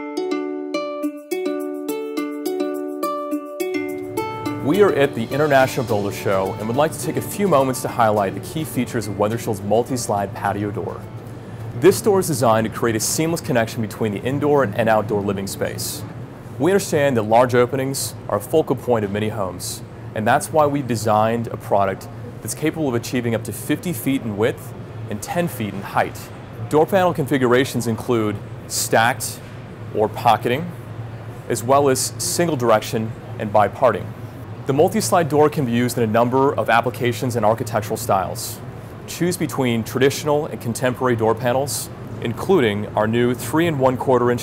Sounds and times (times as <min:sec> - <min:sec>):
Speech: 0:04.7 - 0:11.1, 0:11.8 - 0:30.8, 0:31.5 - 0:34.1, 0:34.7 - 0:44.4.